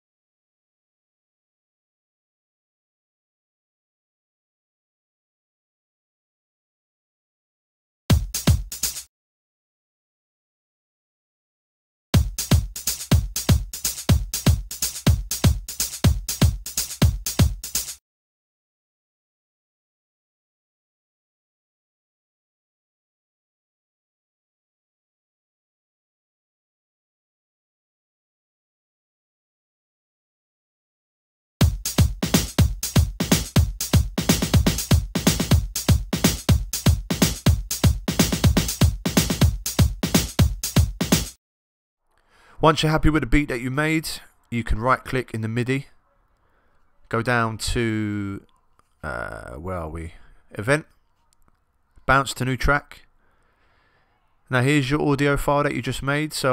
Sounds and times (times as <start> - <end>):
House music: 8.1 - 9.0, 12.2 - 18.0, 31.6 - 41.4
Drum machine: 8.1 - 9.1, 12.2 - 18.0, 31.6 - 41.4.